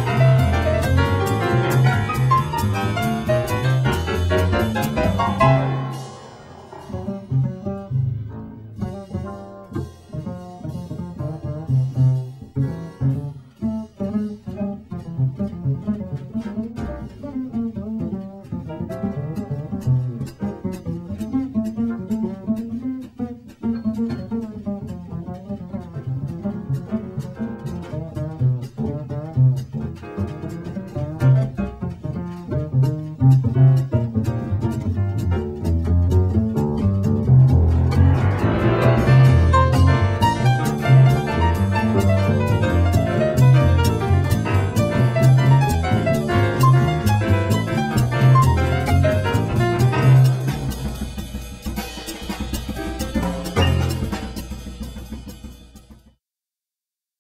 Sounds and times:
Pizzicato: 0.0 - 50.9
Cello: 0.0 - 51.0.

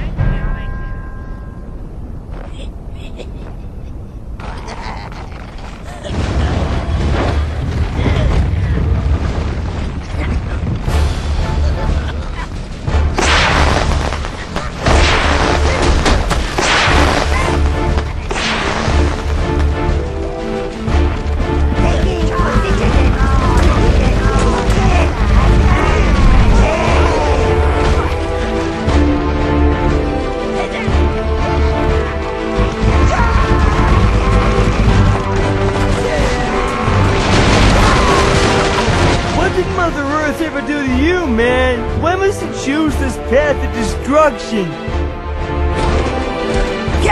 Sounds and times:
Music: 0.0 - 2.2, 10.7 - 47.1.

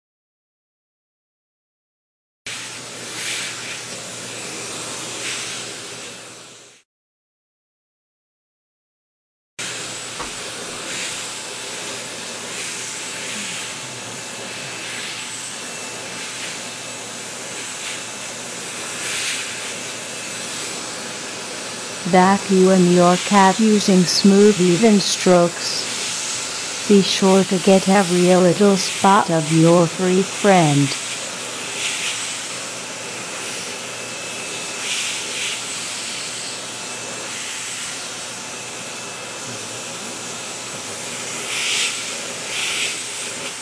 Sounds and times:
Speech: 22.1 - 25.9, 26.9 - 31.0.

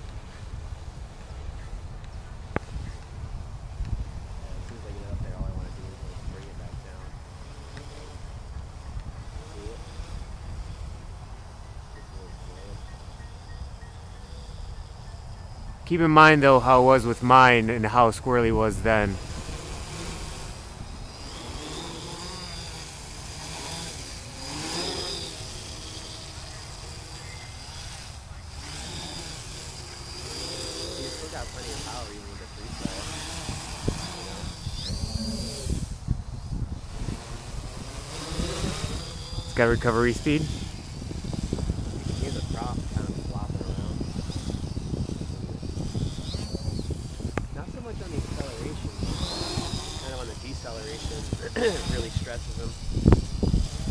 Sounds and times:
Speech: 15.9 - 19.2, 31.0 - 33.0, 47.6 - 49.0, 50.0 - 52.8.

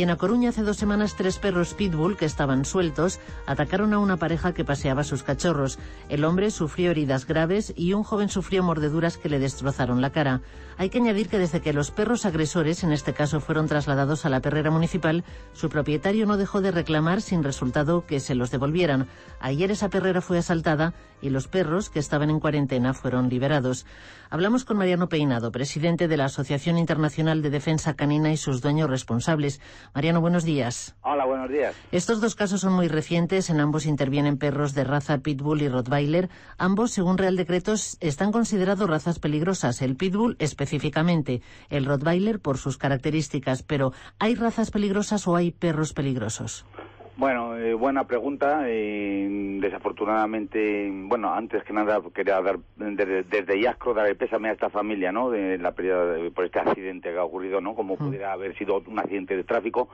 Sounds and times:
Music: 0.0 - 30.6, 31.4 - 51.2.

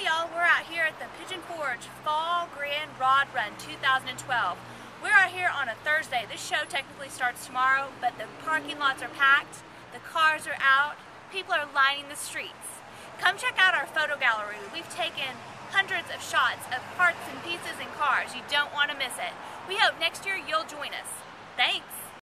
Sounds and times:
Speech: 0.0 - 22.2.

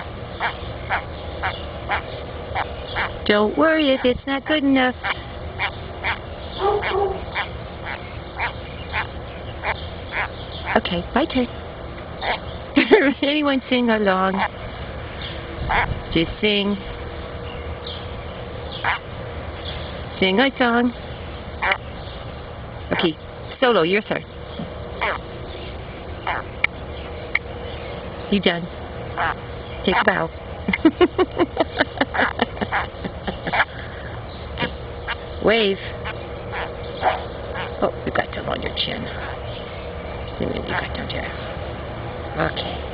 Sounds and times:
Frog: 0.0 - 3.2, 5.0 - 10.9, 12.2 - 12.5, 15.7 - 15.9, 18.8 - 19.1, 21.6 - 21.8, 25.0 - 25.2, 26.2 - 26.7, 29.2 - 30.1, 33.5 - 33.7, 36.0 - 37.8.

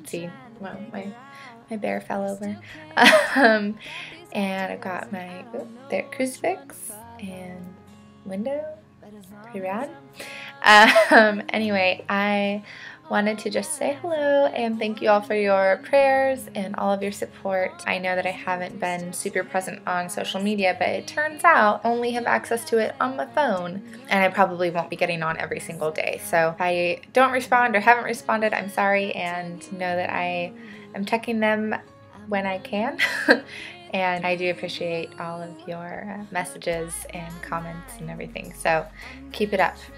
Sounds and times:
Speech: 0.0 - 2.7, 4.4 - 7.7, 8.3 - 8.8, 9.5 - 9.9, 10.6 - 33.0, 33.9 - 39.9
Music: 0.0 - 39.9.

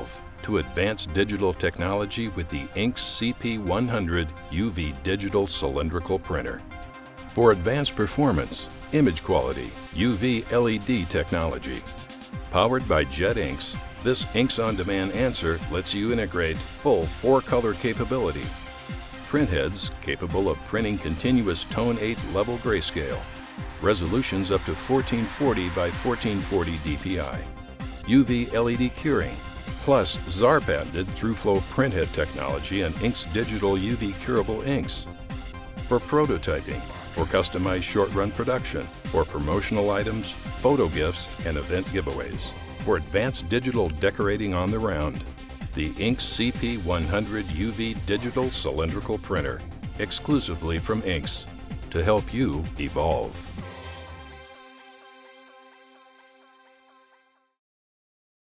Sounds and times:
Speech: 0.0 - 6.6, 7.4 - 11.9, 12.5 - 18.6, 19.3 - 27.5, 28.1 - 35.1, 35.9 - 53.5
Music: 0.0 - 57.6.

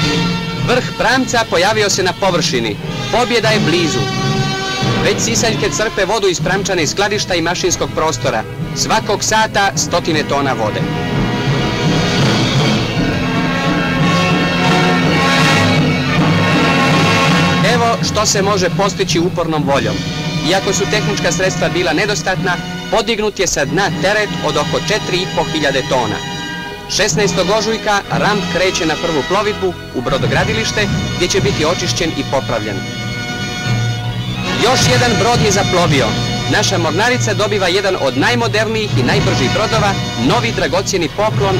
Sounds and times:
Speech: 0.0 - 4.1, 5.0 - 10.9, 17.6 - 26.2, 26.9 - 32.8, 34.6 - 41.6
Music: 0.0 - 41.6.

